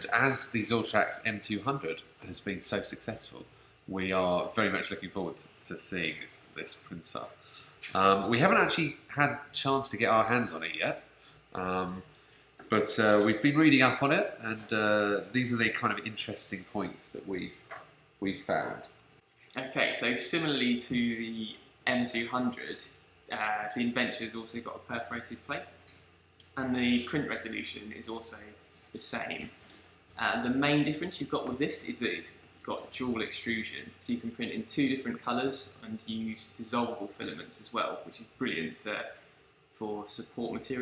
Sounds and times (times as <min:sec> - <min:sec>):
Speech: 0:00.0 - 0:18.9, 0:19.5 - 0:25.8, 0:26.4 - 0:29.6, 0:30.2 - 0:39.2, 0:39.8 - 0:40.8.